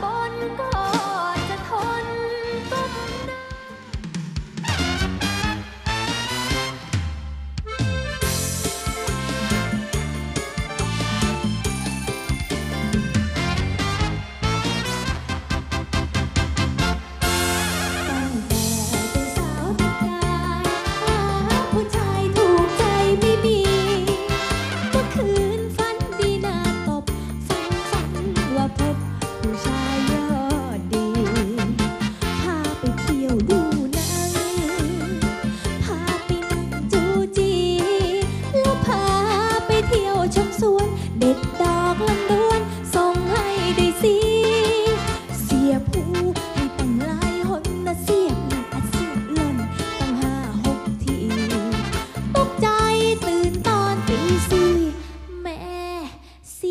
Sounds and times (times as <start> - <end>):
Music: 0.0 - 56.7.